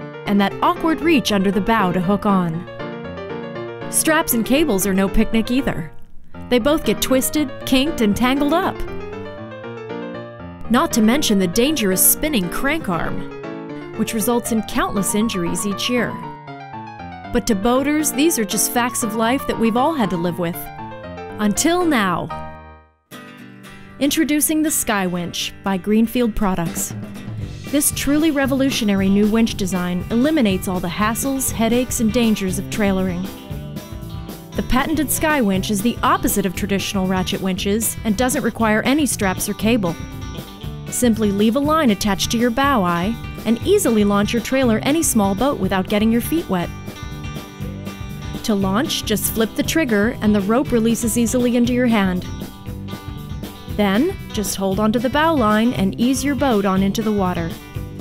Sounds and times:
Music: 0:00.0 - 0:58.0
Speech: 0:00.3 - 0:02.7, 0:03.9 - 0:05.9, 0:06.5 - 0:08.8, 0:10.7 - 0:13.2, 0:14.0 - 0:16.2, 0:17.4 - 0:20.7, 0:21.4 - 0:22.3, 0:24.0 - 0:26.9, 0:27.7 - 0:33.3, 0:34.6 - 0:40.0, 0:41.0 - 0:46.7, 0:48.4 - 0:52.3, 0:53.8 - 0:57.6.

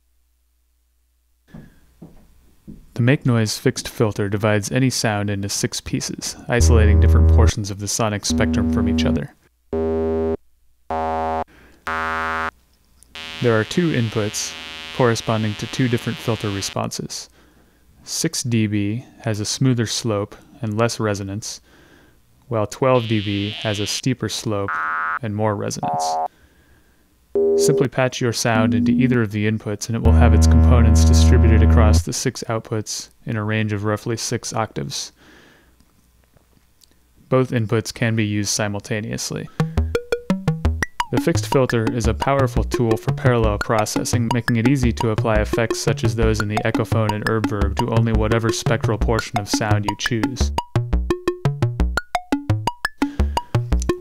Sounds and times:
Speech: 0:03.0 - 0:09.4, 0:13.4 - 0:17.3, 0:18.0 - 0:21.6, 0:22.5 - 0:26.2, 0:27.6 - 0:35.2, 0:37.3 - 0:39.5, 0:41.1 - 0:50.5.

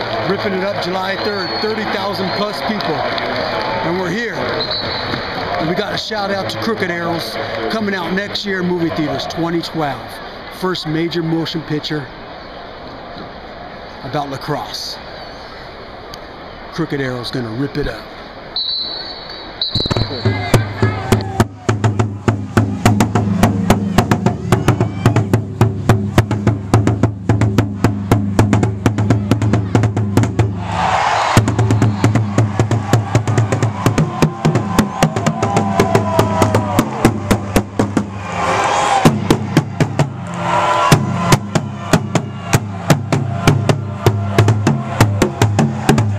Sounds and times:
Speech: 0:00.2 - 0:03.1, 0:03.8 - 0:04.5, 0:05.6 - 0:12.1, 0:14.0 - 0:15.0, 0:16.7 - 0:18.1
Music: 0:20.1 - 0:46.1.

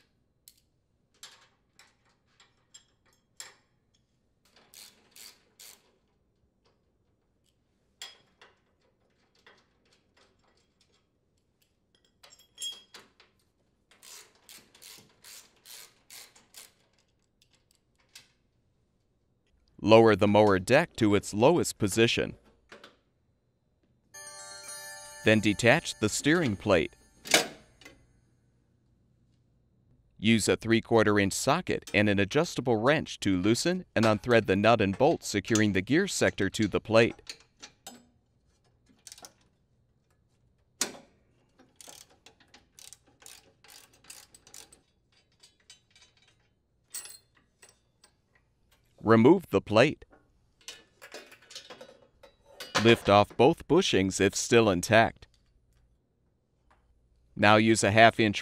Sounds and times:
Tools: 0:00.4 - 0:18.4, 0:37.2 - 0:40.2, 0:40.8 - 0:49.0, 0:50.1 - 0:53.1
Speech: 0:19.8 - 0:22.4, 0:25.2 - 0:27.0, 0:30.2 - 0:37.2, 0:49.0 - 0:50.0, 0:52.8 - 0:55.2, 0:57.4 - 0:58.4.

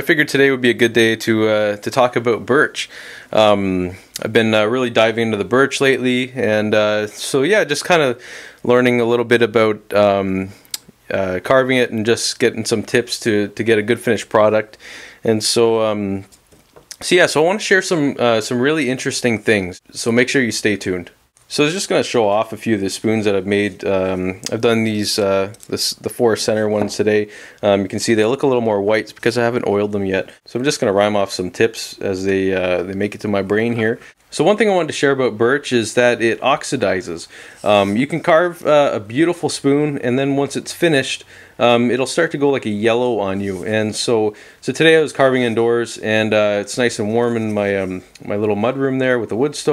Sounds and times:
Speech: 0:00.0 - 0:16.3, 0:16.9 - 0:49.7.

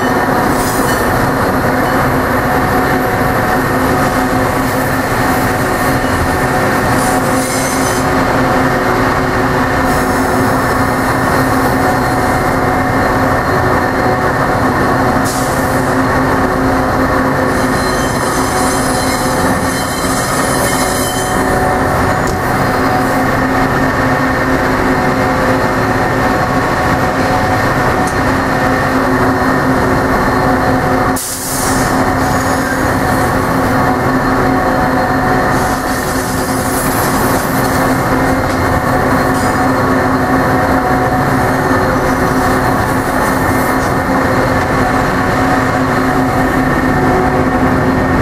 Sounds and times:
Vehicle: 0:00.0 - 0:48.2.

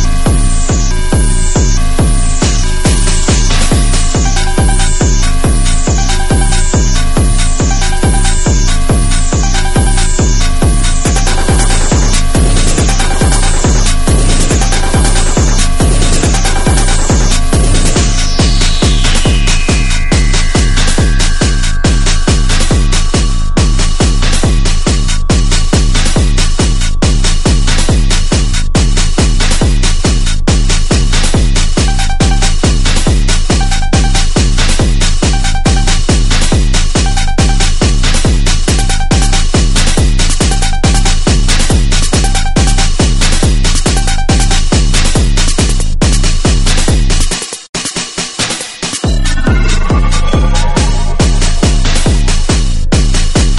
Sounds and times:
Techno: 0:00.0 - 0:53.5.

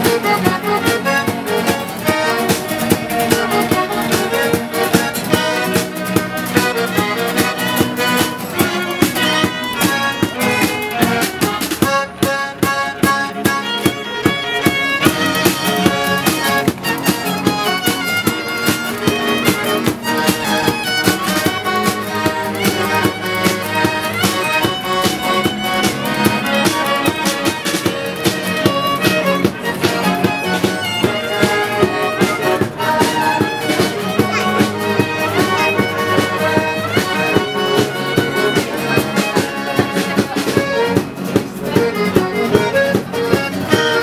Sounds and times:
Music: 0:00.0 - 0:44.0.

